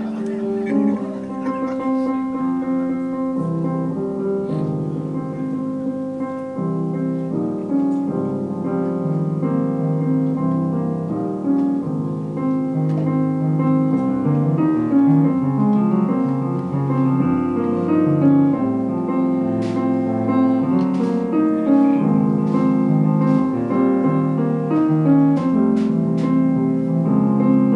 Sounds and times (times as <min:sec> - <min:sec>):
Music: 0:00.0 - 0:27.7.